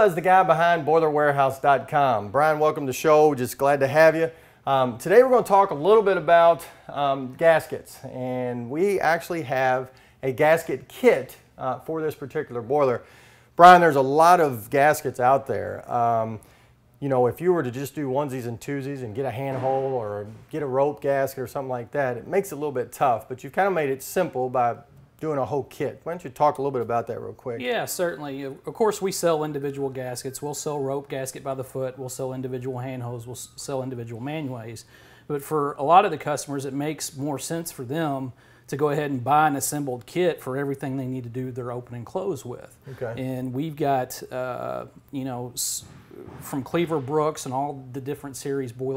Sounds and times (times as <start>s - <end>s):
Speech: 0.0s - 13.0s, 13.6s - 16.4s, 17.0s - 48.9s.